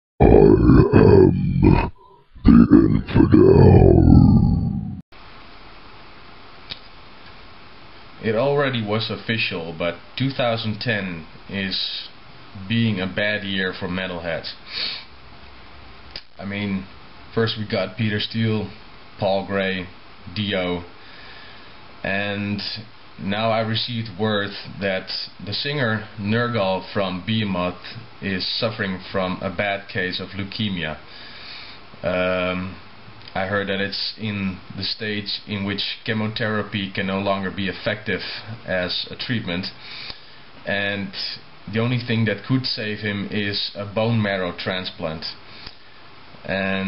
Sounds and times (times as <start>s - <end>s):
Speech: 0.2s - 5.0s, 8.2s - 14.6s, 16.4s - 20.9s, 22.0s - 31.0s, 32.0s - 39.8s, 40.6s - 45.4s, 46.4s - 46.8s
Inside, small room: 0.2s - 46.8s.